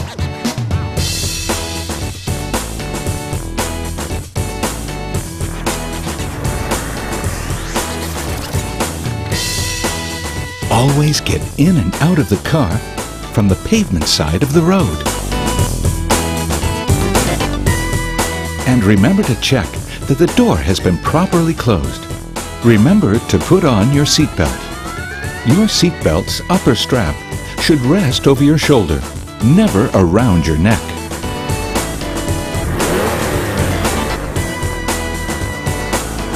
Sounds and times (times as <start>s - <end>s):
Music: 0.0s - 36.3s
Speech: 10.7s - 15.1s, 18.6s - 24.6s, 25.4s - 31.0s.